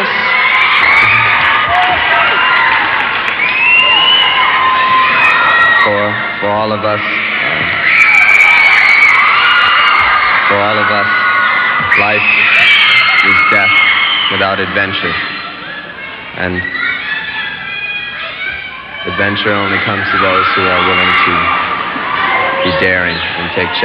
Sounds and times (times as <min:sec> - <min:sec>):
Speech: 0:22.6 - 0:23.8.